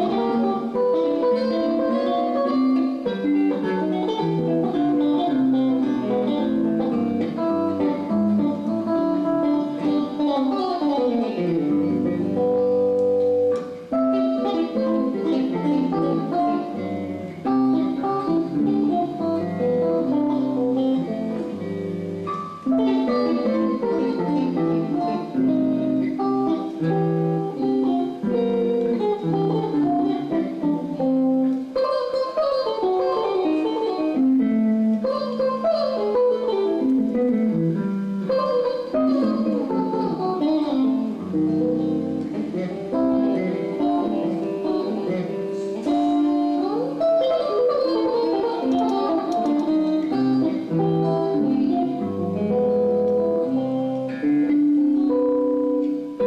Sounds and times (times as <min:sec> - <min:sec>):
Guitar: 0:00.0 - 0:56.2
Inside, large room or hall: 0:00.0 - 0:56.2.